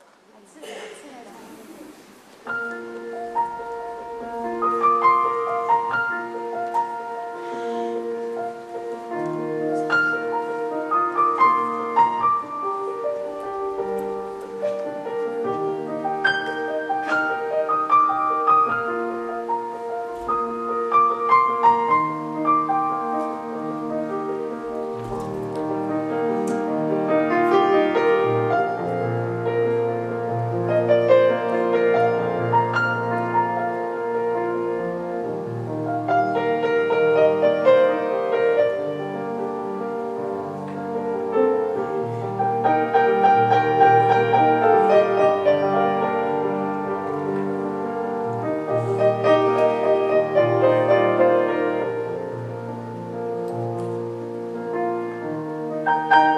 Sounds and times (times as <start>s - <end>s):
Music: 2.4s - 56.3s.